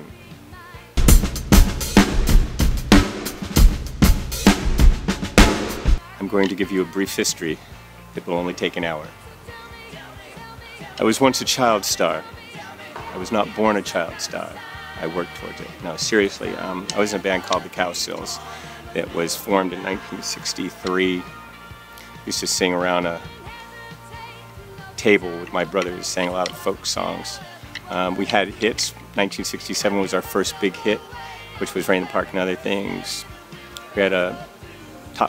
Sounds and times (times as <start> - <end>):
Music: 0.0 - 35.2
Speech: 6.2 - 7.6, 8.2 - 9.2, 10.9 - 12.3, 13.0 - 21.3, 22.2 - 23.3, 25.0 - 34.5.